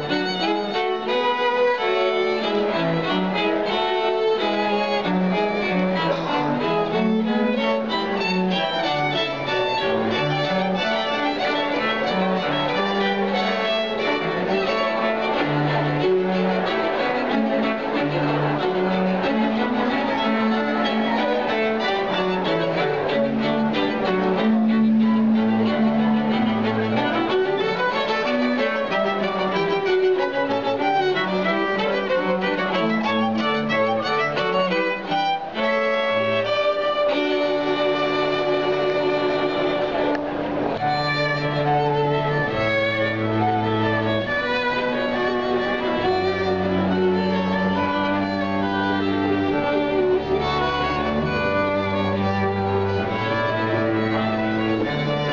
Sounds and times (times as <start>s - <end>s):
Cello: 0.0s - 55.3s
String section: 0.0s - 55.3s
Violin, fiddle: 0.0s - 55.3s.